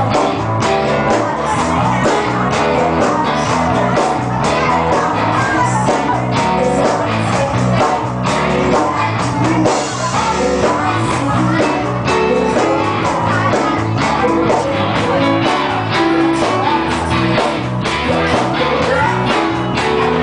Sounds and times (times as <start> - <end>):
Female singing: 0.0 - 20.2
Music: 0.0 - 20.2.